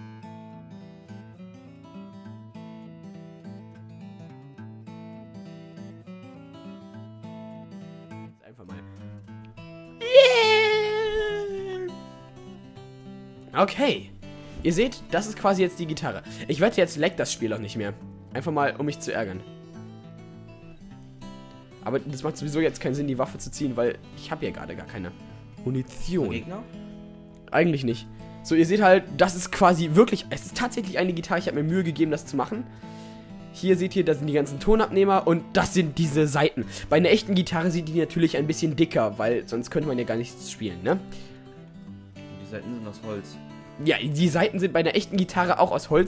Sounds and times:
Acoustic guitar: 0.0s - 46.0s
Speech: 8.4s - 8.9s, 10.0s - 12.0s, 13.6s - 19.4s, 21.8s - 26.7s, 27.5s - 32.6s, 33.6s - 41.2s, 42.5s - 46.0s.

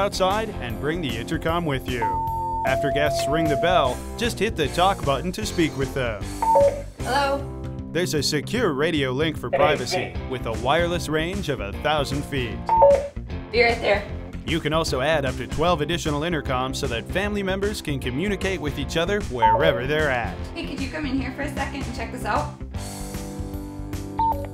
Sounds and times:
Speech: 0.0s - 2.1s, 8.0s - 12.6s, 13.6s - 22.5s
Music: 0.0s - 24.5s
Doorbell: 2.0s - 3.9s.

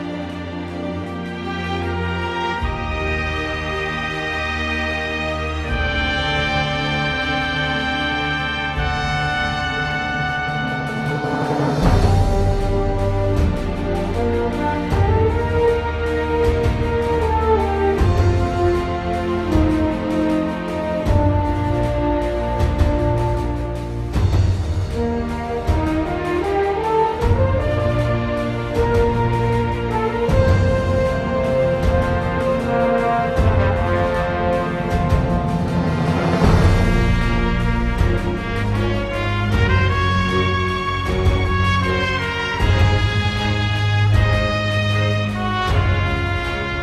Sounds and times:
Music: 0.0s - 46.8s.

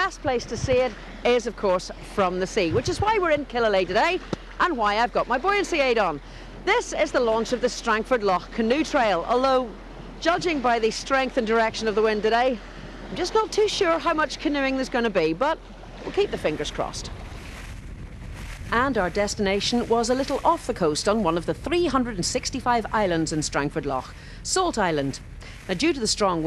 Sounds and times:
Speech: 0.0s - 17.1s, 18.7s - 26.4s
Rowboat, canoe, kayak: 0.0s - 26.4s.

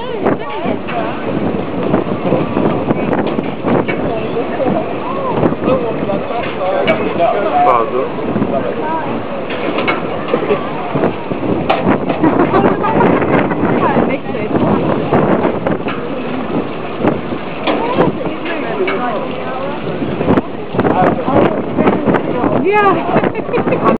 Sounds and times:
Speech: 17.7s - 23.9s.

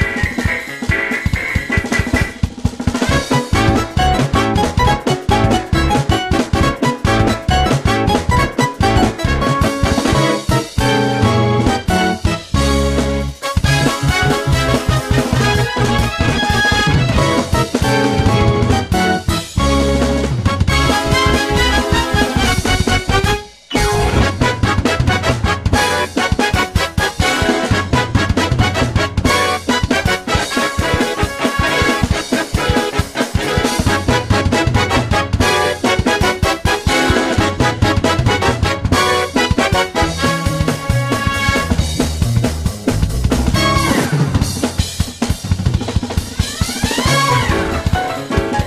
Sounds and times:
Theme music: 0.0s - 42.2s, 42.9s - 44.6s, 46.4s - 48.6s
Soundtrack music: 0.0s - 44.7s, 46.4s - 48.6s.

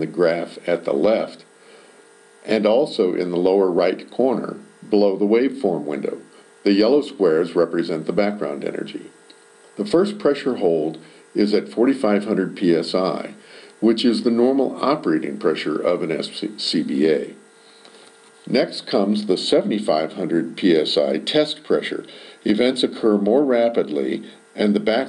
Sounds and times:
Speech: 0.0s - 1.5s, 2.4s - 9.2s, 9.8s - 17.4s, 18.4s - 25.0s.

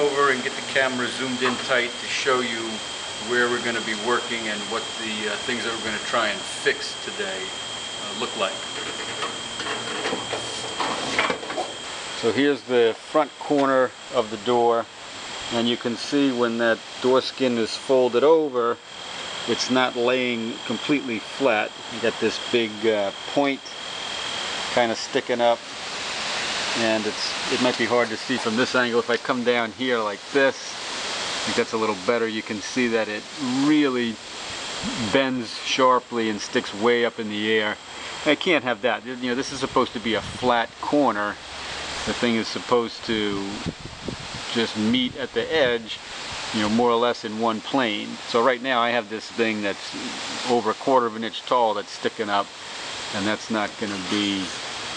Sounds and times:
Speech: 0.0s - 8.8s, 12.2s - 14.9s, 15.5s - 18.8s, 19.5s - 23.8s, 24.8s - 25.6s, 26.8s - 30.8s, 31.4s - 34.2s, 34.8s - 41.4s, 42.0s - 43.7s, 44.5s - 52.5s, 53.1s - 54.6s.

